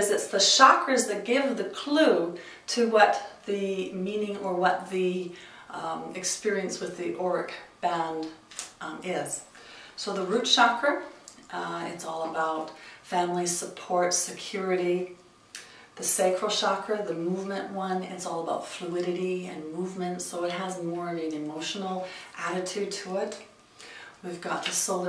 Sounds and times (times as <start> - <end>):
Speech: 0.0 - 15.2, 16.0 - 23.5, 24.2 - 25.0.